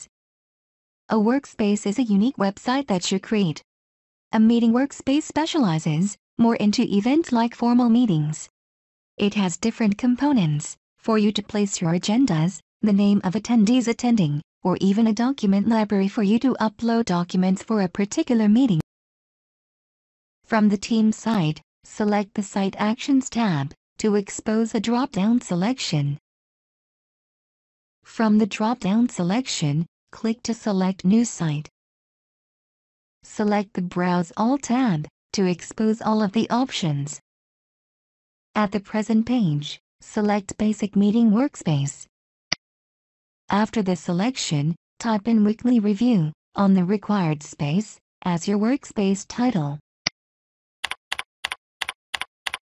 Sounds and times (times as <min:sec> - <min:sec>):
Speech: 0:01.1 - 0:03.7, 0:04.4 - 0:08.5, 0:09.2 - 0:18.9, 0:20.5 - 0:26.2, 0:28.1 - 0:31.7, 0:33.3 - 0:37.2, 0:38.6 - 0:42.1, 0:43.5 - 0:49.8.